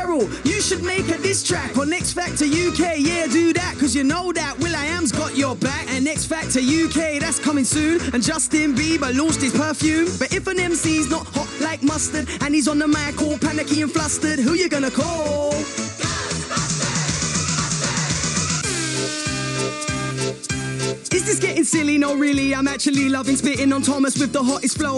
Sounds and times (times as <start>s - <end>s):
Music: 0.0s - 24.9s.